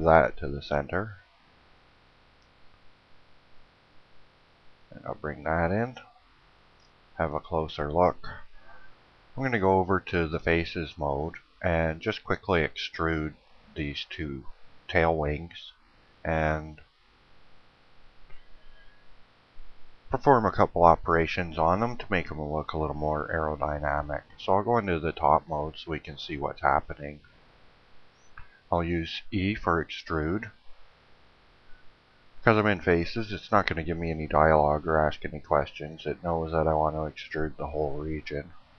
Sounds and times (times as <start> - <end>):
Speech: 0.0 - 1.2, 4.9 - 6.1, 7.2 - 8.5, 9.4 - 16.8, 20.2 - 27.2, 28.7 - 30.6, 32.4 - 38.6.